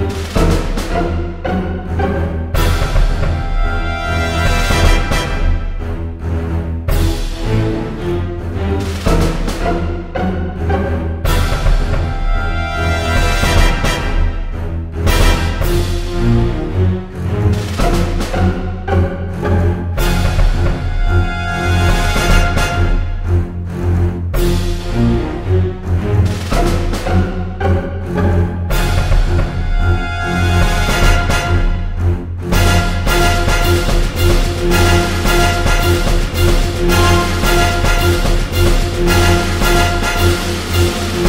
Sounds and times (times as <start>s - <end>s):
Percussion: 0.0s - 6.1s, 6.8s - 41.2s
Orchestra: 0.0s - 41.2s.